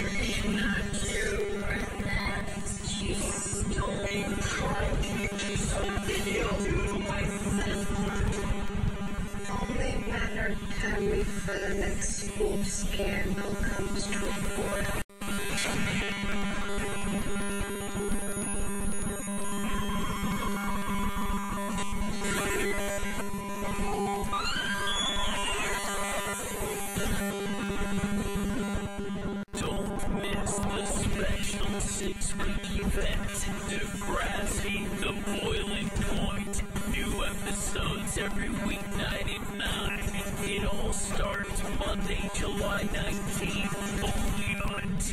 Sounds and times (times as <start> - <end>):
Music: 0.0 - 45.1.